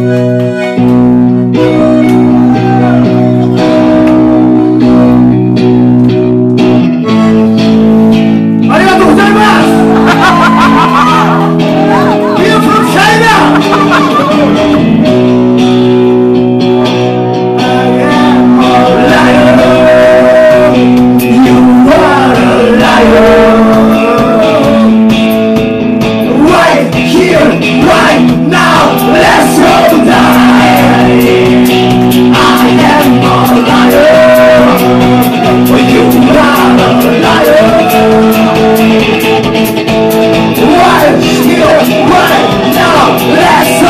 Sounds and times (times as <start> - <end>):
Music: 0.0 - 43.8.